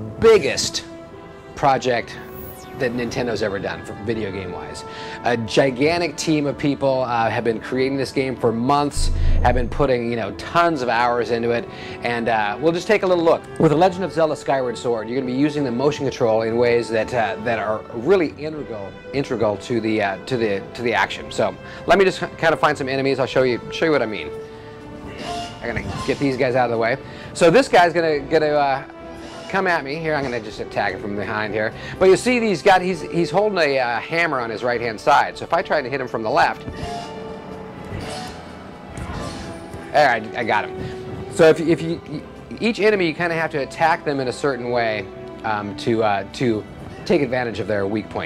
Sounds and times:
Speech: 0.0 - 0.9, 1.6 - 2.2, 2.8 - 24.3, 25.6 - 28.9, 29.5 - 36.6, 39.9 - 48.2
Music: 0.0 - 48.2.

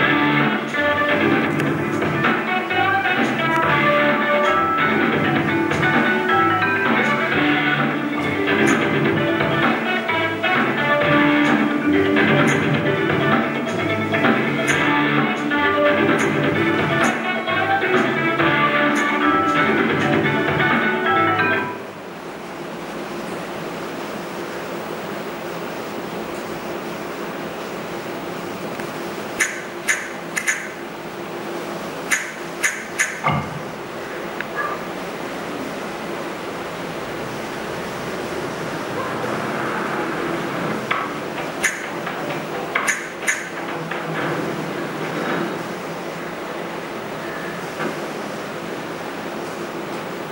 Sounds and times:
Music: 0.0 - 21.8.

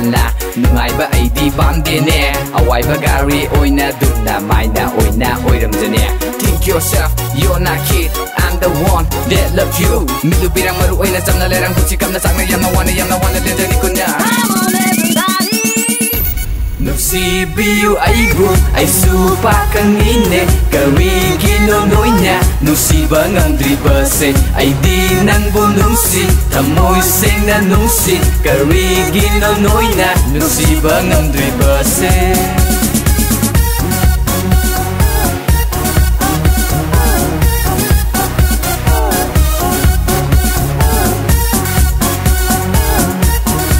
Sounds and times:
Singing: 0.0 - 16.2, 16.8 - 33.0, 36.2 - 43.7
Music: 0.0 - 43.7.

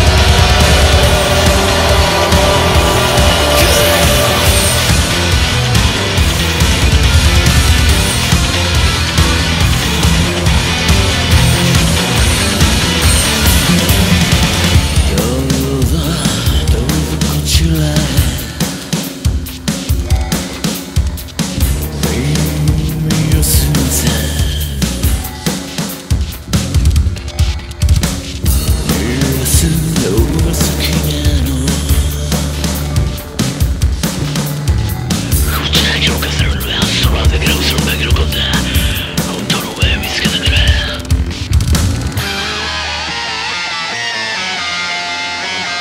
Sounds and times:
Music: 0.0 - 45.8
Speech: 22.1 - 24.5, 28.9 - 31.8, 35.4 - 41.1.

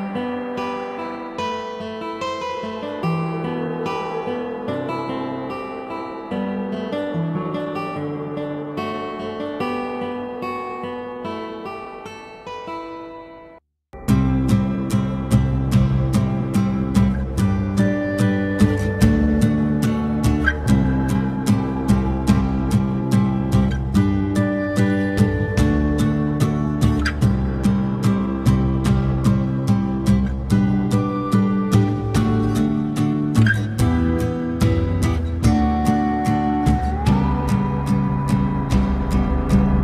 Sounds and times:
Tender music: 0.0 - 12.5, 14.0 - 39.8.

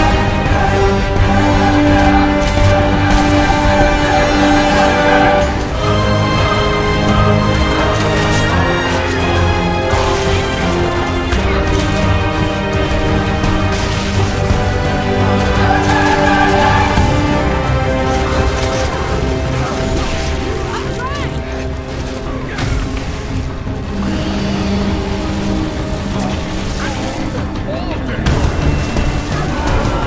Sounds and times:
Music: 0.0 - 30.0.

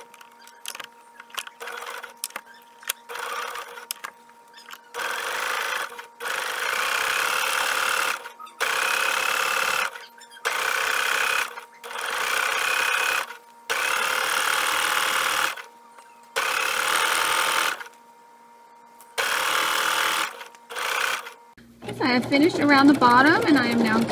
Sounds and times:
Sewing machine: 1.4 - 2.2, 3.1 - 4.0, 5.0 - 15.7, 16.4 - 17.9, 19.2 - 24.1.

